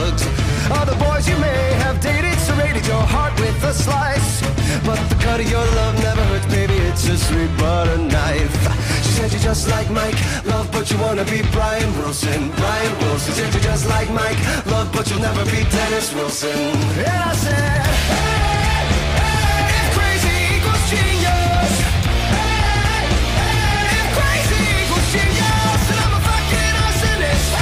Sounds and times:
Punk rock: 0:00.0 - 0:27.6.

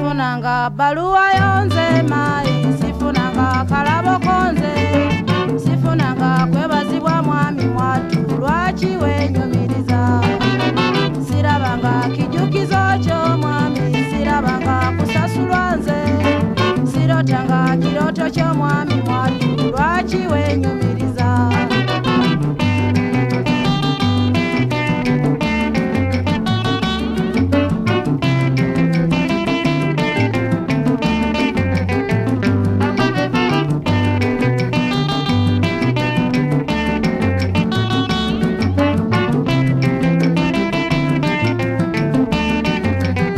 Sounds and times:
Music: 0:00.0 - 0:43.3.

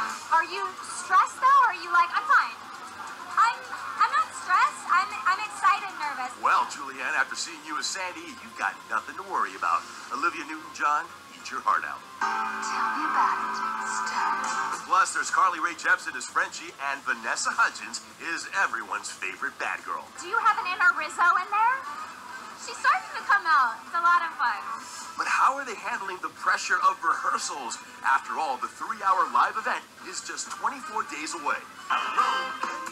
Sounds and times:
Music: 0:00.0 - 0:32.9.

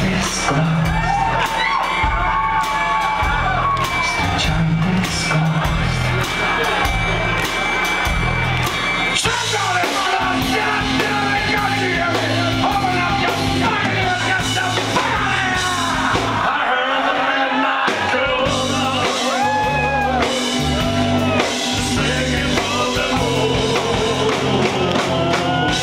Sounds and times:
Singing: 0:00.0 - 0:06.2, 0:09.2 - 0:25.8
Inside, public space: 0:00.0 - 0:25.8
Music: 0:00.0 - 0:25.8.

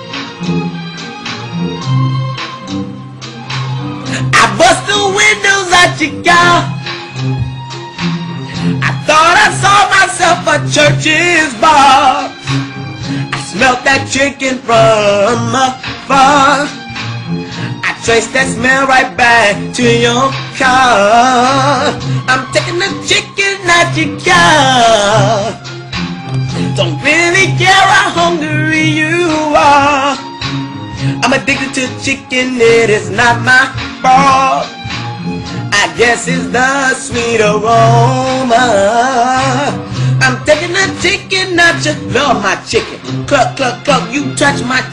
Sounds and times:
Music: 0:00.0 - 0:44.9.

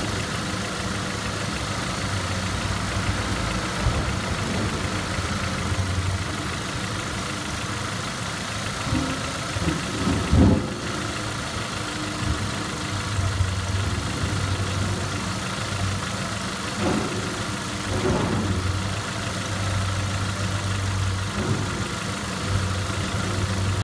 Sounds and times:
Idling: 0:00.0 - 0:23.8
Medium engine (mid frequency): 0:00.0 - 0:23.8.

